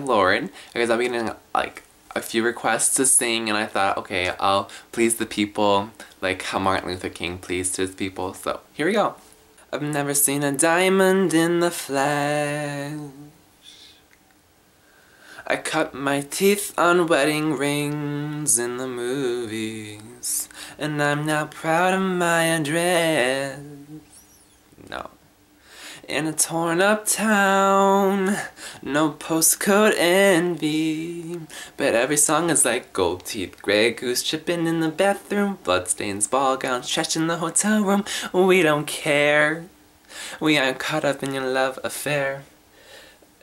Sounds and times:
Male singing: 0:00.0 - 0:09.1, 0:09.7 - 0:13.4, 0:15.4 - 0:24.1, 0:26.0 - 0:39.7, 0:40.4 - 0:42.5.

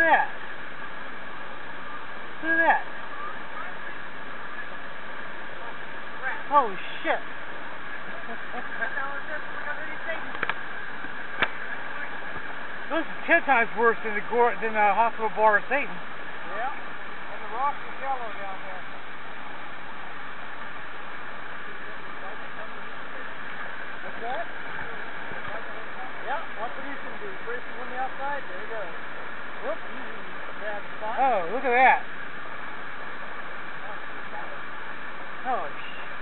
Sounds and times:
Wind: 0:00.0 - 0:36.2.

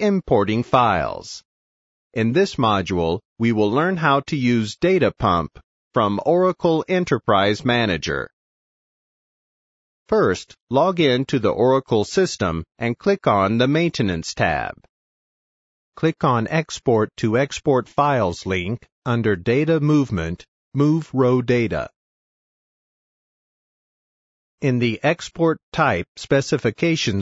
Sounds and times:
Speech: 0:00.0 - 0:01.5, 0:02.2 - 0:08.4, 0:10.1 - 0:14.9, 0:16.0 - 0:22.0, 0:24.6 - 0:27.2.

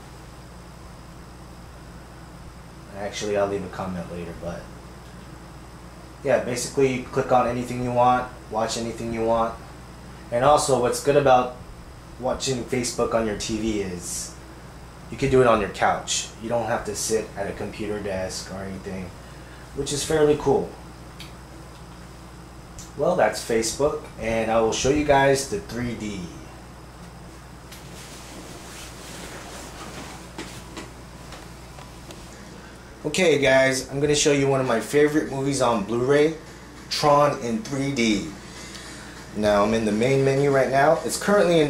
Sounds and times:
Speech: 0:02.9 - 0:04.7, 0:06.2 - 0:09.6, 0:10.3 - 0:11.6, 0:12.2 - 0:14.4, 0:15.1 - 0:19.2, 0:19.8 - 0:20.8, 0:22.8 - 0:26.5, 0:33.0 - 0:38.4, 0:39.4 - 0:41.6.

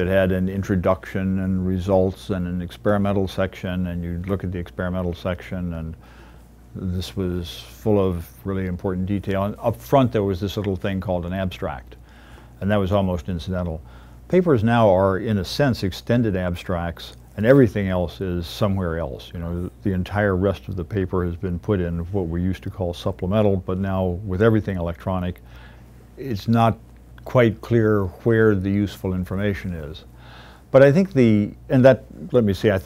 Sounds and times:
Speech: 0:00.0 - 0:06.0, 0:06.7 - 0:12.0, 0:12.6 - 0:25.4, 0:26.2 - 0:30.1, 0:30.7 - 0:32.8.

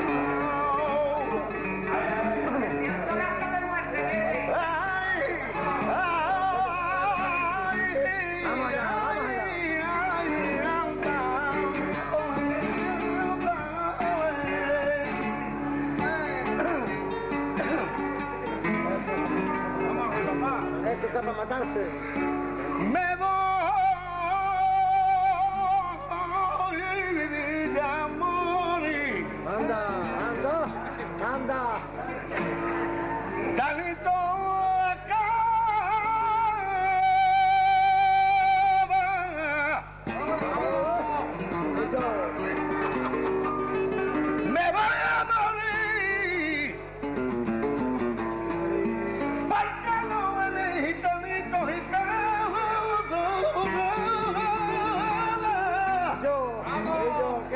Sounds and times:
Singing: 0:00.0 - 0:17.0, 0:22.7 - 0:30.5, 0:33.6 - 0:41.6, 0:44.4 - 0:46.9, 0:49.2 - 0:57.5
Music: 0:00.0 - 0:57.5
Male speech, man speaking: 0:01.9 - 0:07.2, 0:07.9 - 0:10.9, 0:19.9 - 0:22.0, 0:27.7 - 0:32.3, 0:40.1 - 0:42.8, 0:54.3 - 0:57.5.

